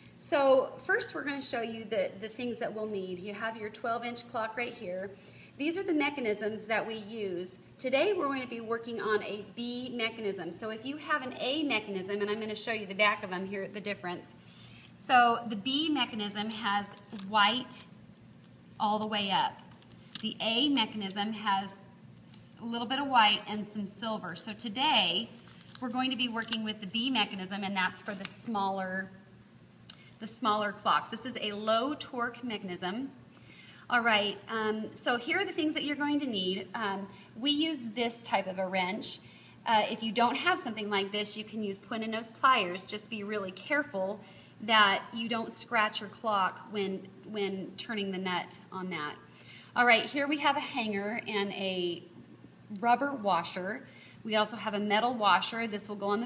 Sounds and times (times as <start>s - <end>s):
Speech: 0.2s - 14.4s, 15.0s - 18.0s, 18.8s - 29.2s, 30.2s - 33.2s, 33.9s - 52.1s, 52.7s - 56.2s.